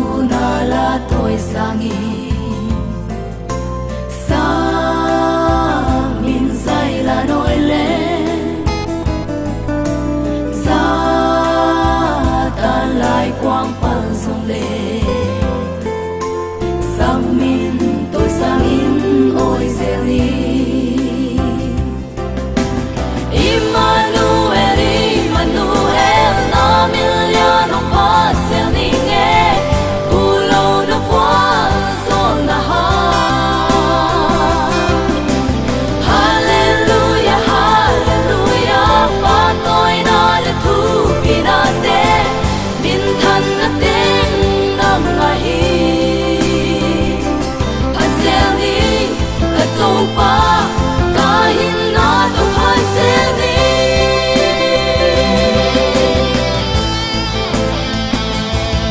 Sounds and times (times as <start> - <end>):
Singing: 0.0 - 3.1, 4.1 - 8.8, 10.5 - 15.8, 16.8 - 22.0, 23.3 - 56.9
Happy music: 0.0 - 58.9.